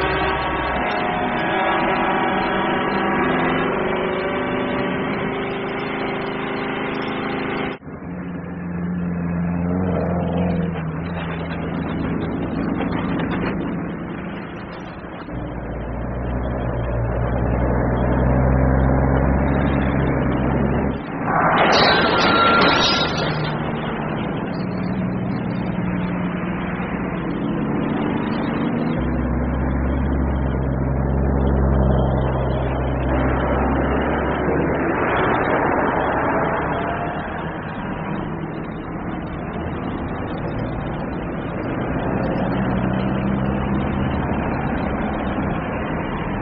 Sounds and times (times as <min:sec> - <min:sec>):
Truck: 0:00.0 - 0:46.4.